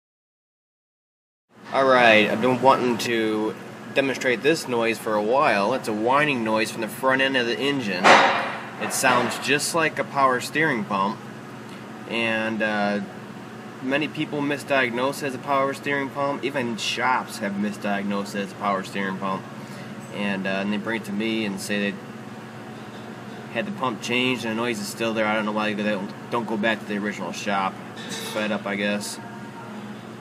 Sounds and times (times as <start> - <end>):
Speech: 1.7 - 8.2, 8.8 - 11.2, 12.1 - 13.1, 13.8 - 19.4, 20.1 - 22.0, 23.5 - 29.3.